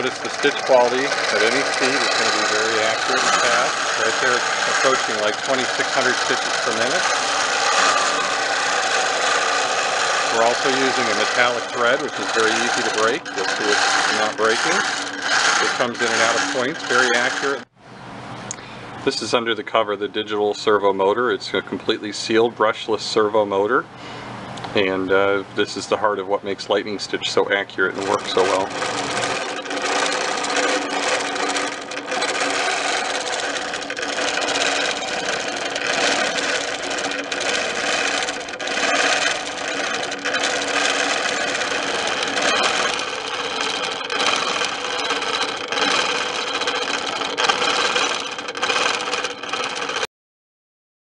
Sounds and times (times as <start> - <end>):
Sewing machine: 0.0 - 17.7, 27.8 - 50.1.